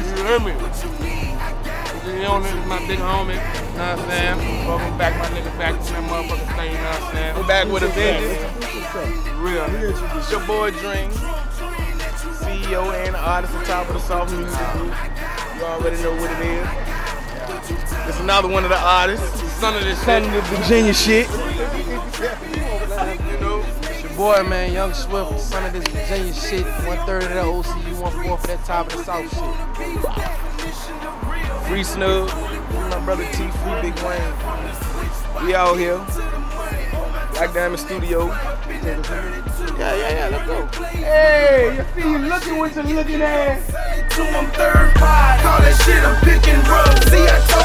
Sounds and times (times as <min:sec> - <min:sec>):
Speech: 0:00.0 - 0:00.8, 0:02.0 - 0:11.2, 0:17.4 - 0:29.4, 0:31.6 - 0:36.1, 0:37.3 - 0:43.7
Music: 0:00.0 - 0:47.6.